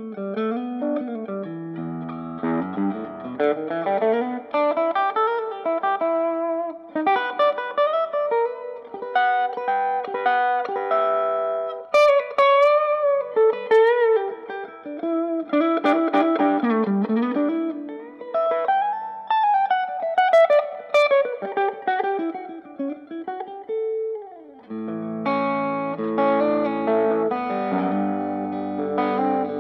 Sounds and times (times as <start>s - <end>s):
Electronic tuner: 0.0s - 29.6s
Guitar: 0.0s - 29.6s
Inside, small room: 0.0s - 29.6s.